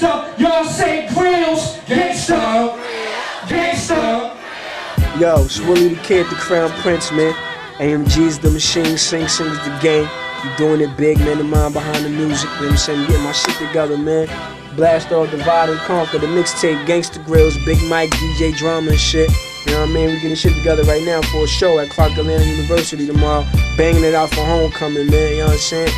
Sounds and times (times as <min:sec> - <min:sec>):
Pop music: 0:00.0 - 0:25.9.